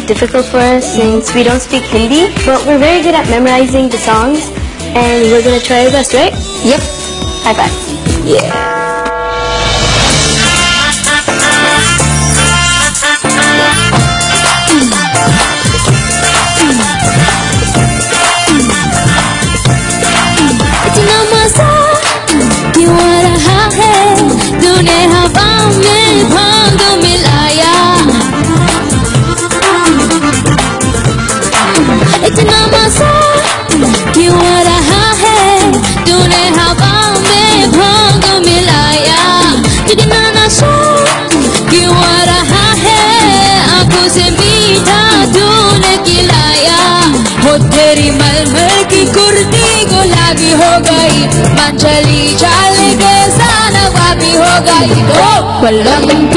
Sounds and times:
Music: 0.0 - 56.3
Speech: 7.5 - 8.6.

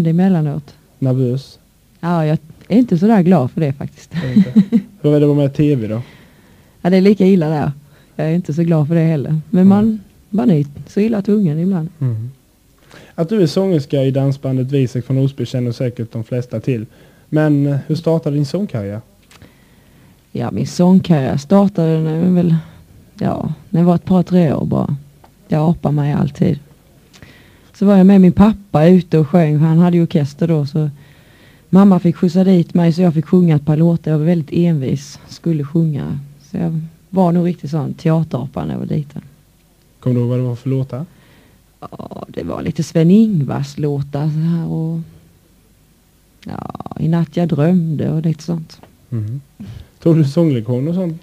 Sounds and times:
Speech: 6.9 - 12.3, 40.0 - 41.1, 46.4 - 49.4.

